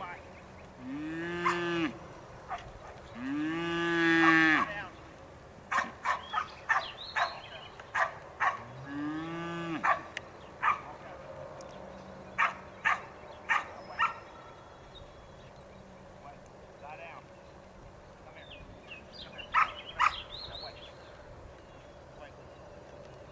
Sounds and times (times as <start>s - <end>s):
Moo: 0.8s - 2.0s, 3.2s - 4.7s, 8.6s - 9.8s.